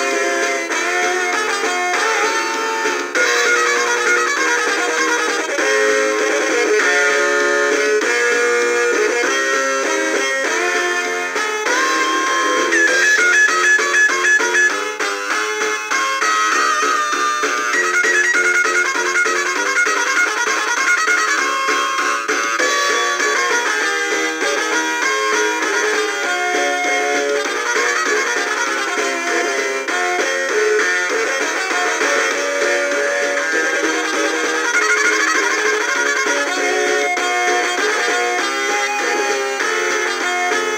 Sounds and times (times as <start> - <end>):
Music: 0.0 - 40.7.